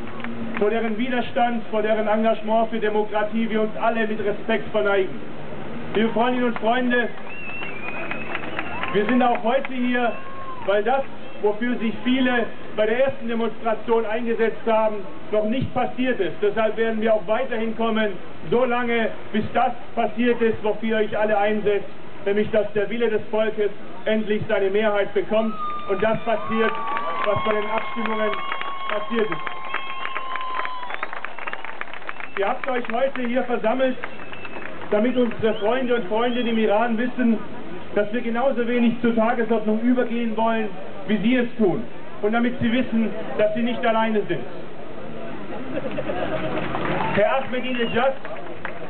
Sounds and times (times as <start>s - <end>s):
Narration, monologue: 0.5s - 7.3s, 8.9s - 29.4s, 32.4s - 44.6s, 47.1s - 48.3s
Male speech, man speaking: 0.6s - 5.1s, 6.0s - 7.2s, 8.9s - 29.4s, 32.4s - 34.0s, 34.9s - 37.4s, 38.0s - 44.5s, 47.2s - 48.2s.